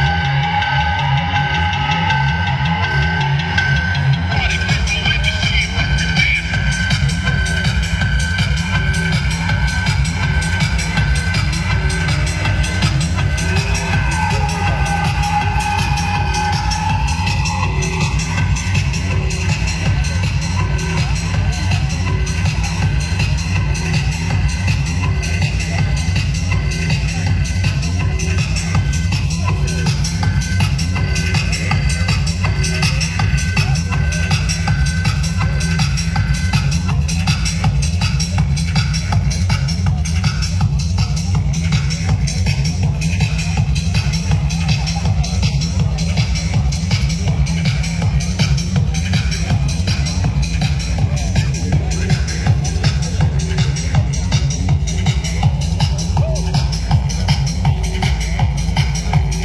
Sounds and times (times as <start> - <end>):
Music: 0.0 - 59.4
Speech: 0.0 - 59.4.